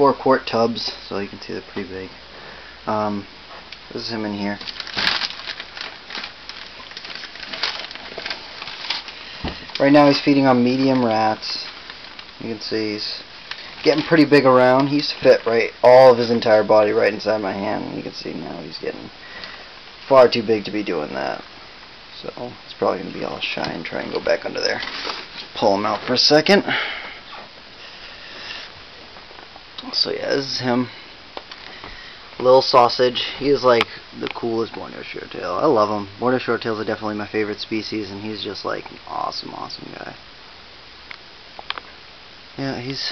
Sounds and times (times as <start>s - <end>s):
Speech: 0.0s - 2.2s, 2.9s - 3.3s, 3.9s - 4.7s, 9.8s - 11.8s, 12.4s - 19.2s, 20.1s - 21.5s, 22.1s - 24.9s, 25.5s - 26.7s, 29.8s - 31.0s, 32.4s - 40.2s, 42.6s - 43.1s
Inside, small room: 0.0s - 43.1s.